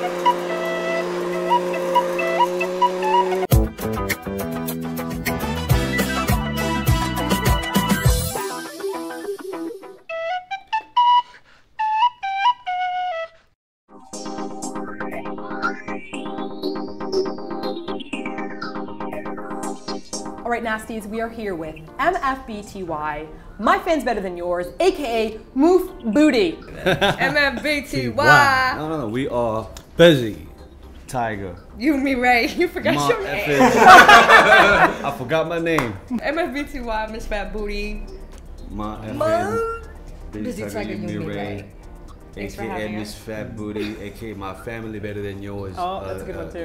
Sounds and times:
Music: 0.0s - 46.6s.

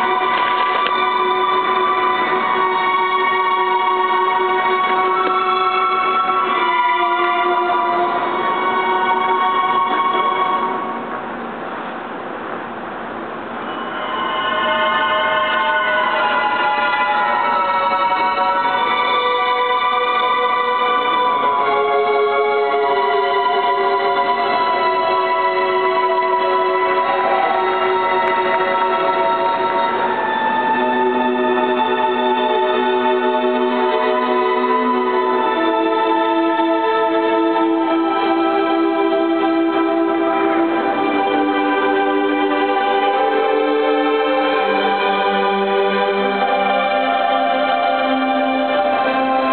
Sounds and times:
Music: 0.0s - 11.4s, 13.5s - 49.5s.

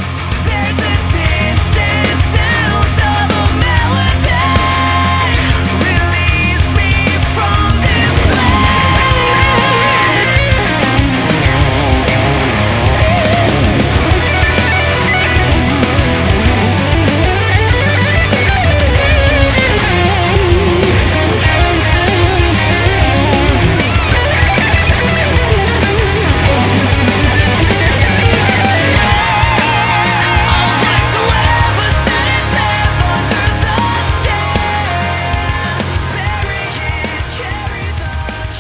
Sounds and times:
Electric guitar: 0.0s - 38.6s
Heavy metal: 0.0s - 38.6s.

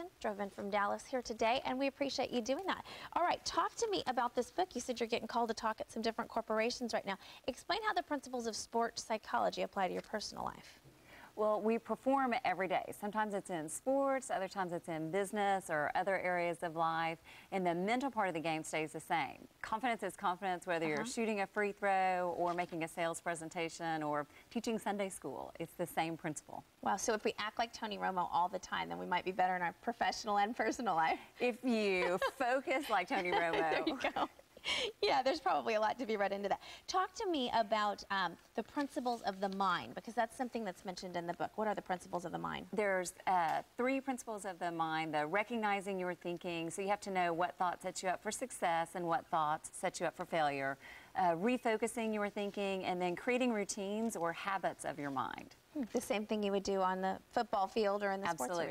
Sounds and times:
Speech: 11.4s - 34.3s, 35.0s - 58.7s.

